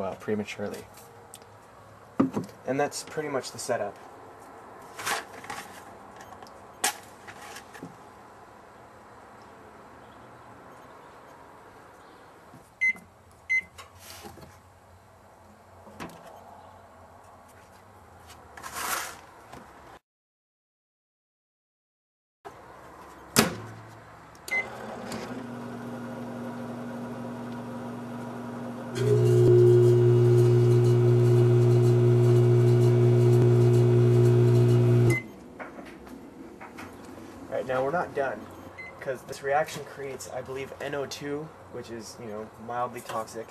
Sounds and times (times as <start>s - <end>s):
Speech: 0.0s - 0.9s, 2.6s - 4.0s, 37.5s - 43.5s.